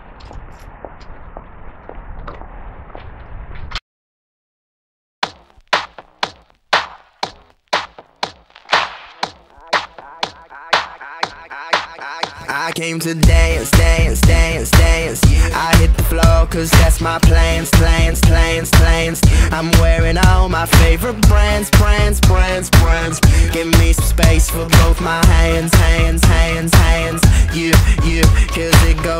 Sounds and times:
Music: 0:09.4 - 0:29.1
Singing: 0:10.0 - 0:29.1.

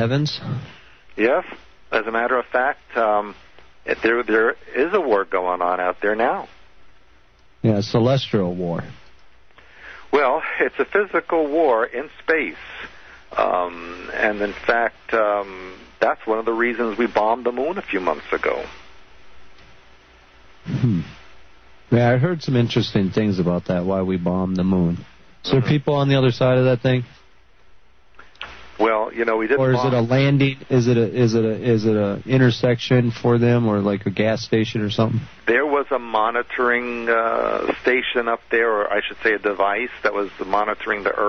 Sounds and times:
Speech: 0:00.0 - 0:06.6, 0:07.6 - 0:09.0, 0:10.1 - 0:18.8, 0:20.7 - 0:21.2, 0:21.9 - 0:27.2, 0:28.8 - 0:41.2.

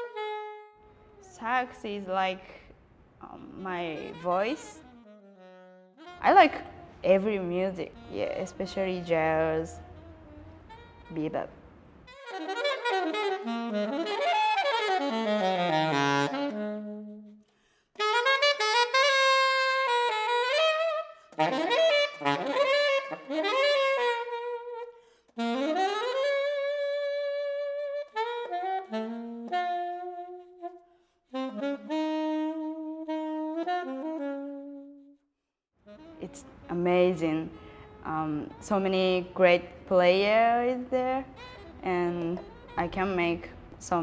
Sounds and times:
Music: 0:00.0 - 0:02.4, 0:03.3 - 0:44.0.

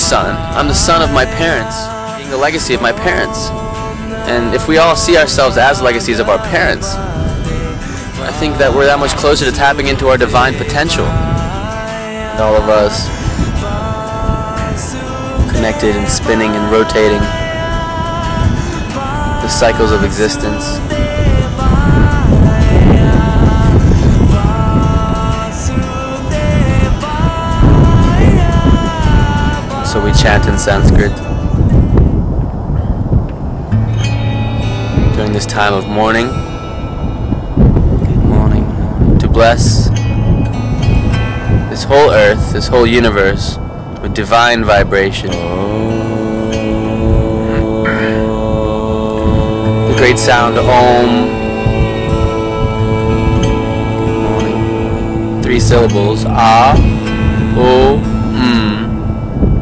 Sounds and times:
Speech: 0:00.0 - 0:03.5, 0:04.3 - 0:07.0, 0:08.2 - 0:11.2, 0:12.4 - 0:13.1, 0:15.6 - 0:17.3, 0:19.4 - 0:20.8, 0:29.9 - 0:31.2, 0:35.2 - 0:36.4, 0:38.1 - 0:39.9, 0:41.7 - 0:45.4, 0:49.9 - 0:51.3, 0:55.4 - 0:56.8, 0:57.6 - 0:58.9
Mantra: 0:00.0 - 0:32.0, 0:41.8 - 0:59.6.

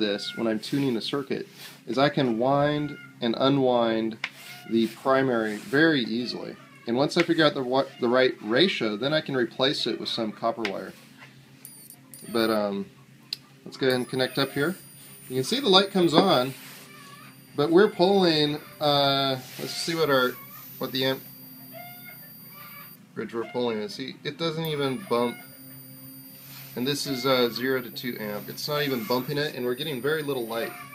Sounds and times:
Speech: 0:00.0 - 0:11.0, 0:13.7 - 0:16.6, 0:17.6 - 0:21.2, 0:23.2 - 0:25.4, 0:26.8 - 0:30.8.

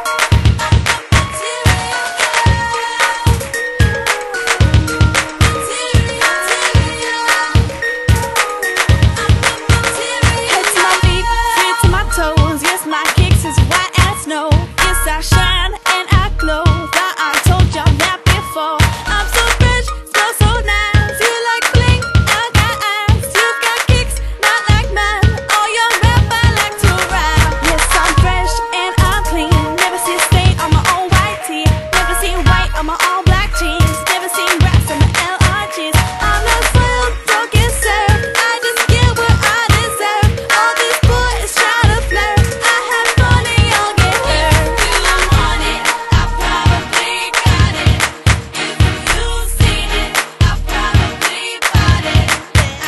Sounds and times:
Pop music: 0:00.0 - 0:52.8.

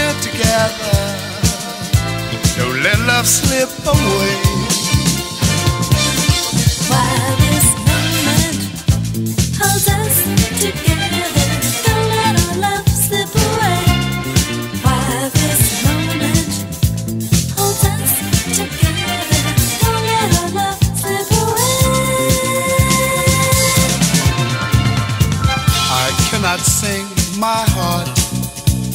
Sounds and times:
Funk: 0:00.0 - 0:28.9.

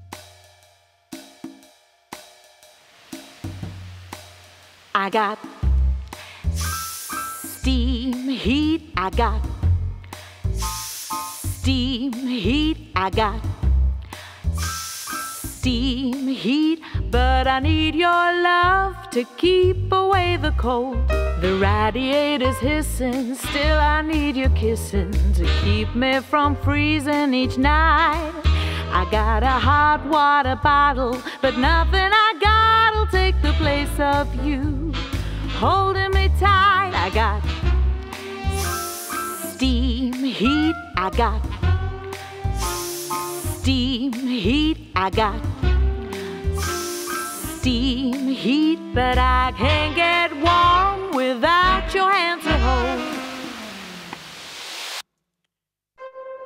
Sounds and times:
Music: 0:00.0 - 0:54.2, 0:56.0 - 0:56.4.

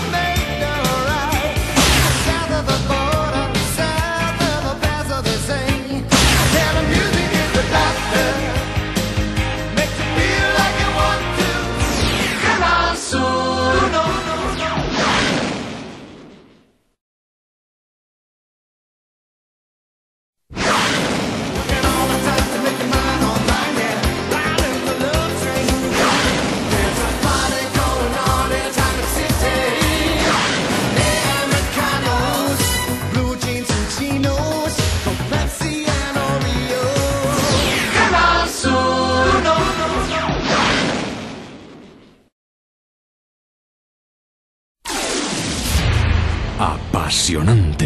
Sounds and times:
Jingle (music): 0:00.0 - 0:12.0, 0:21.7 - 0:30.2, 0:31.0 - 0:37.5.

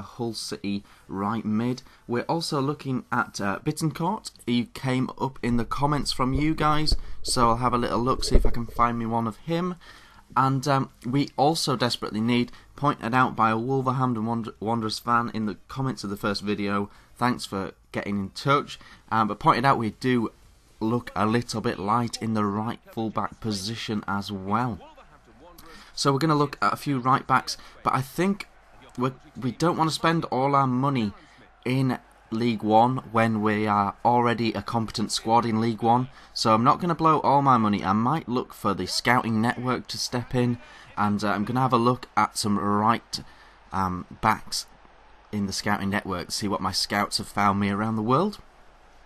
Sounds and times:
Speech: 0:00.0 - 0:44.7, 0:45.4 - 0:48.4.

